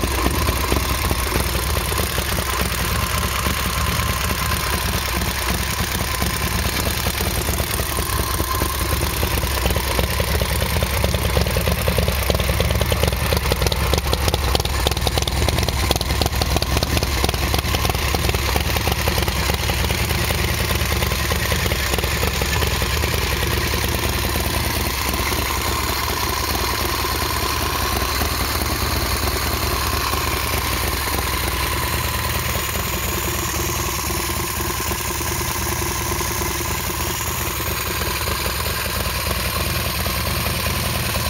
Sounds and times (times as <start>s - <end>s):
Engine: 0.0s - 41.2s
Motorcycle: 0.0s - 41.2s.